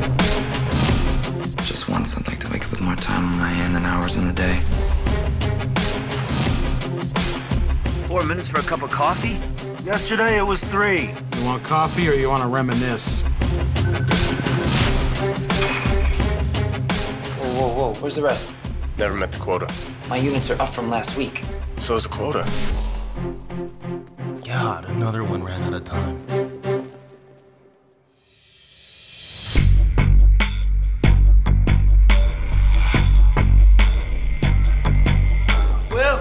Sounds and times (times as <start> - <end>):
Music: 0.0 - 36.2
Speech: 8.0 - 13.2, 24.4 - 26.2.